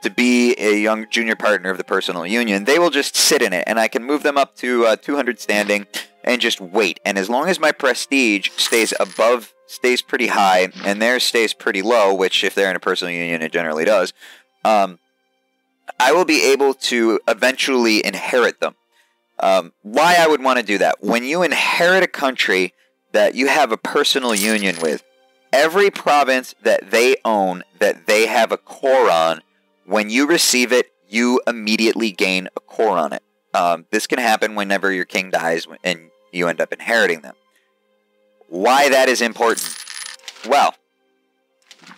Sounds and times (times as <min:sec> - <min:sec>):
Speech: 0:00.0 - 0:15.0, 0:15.9 - 0:18.7, 0:19.4 - 0:25.0, 0:25.6 - 0:37.3, 0:38.5 - 0:39.7, 0:40.4 - 0:40.8
Music: 0:00.0 - 0:41.9.